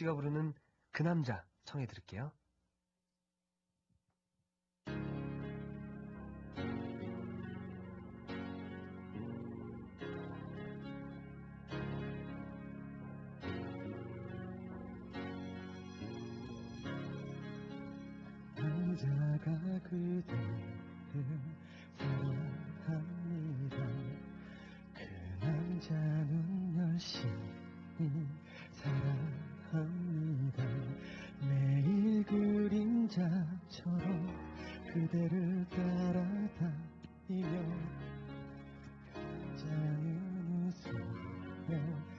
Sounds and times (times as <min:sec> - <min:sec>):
Music: 0:00.0 - 0:01.4, 0:04.9 - 0:42.1
Male singing: 0:16.0 - 0:16.8, 0:18.6 - 0:20.4, 0:21.1 - 0:24.2, 0:25.0 - 0:37.9, 0:39.6 - 0:42.1.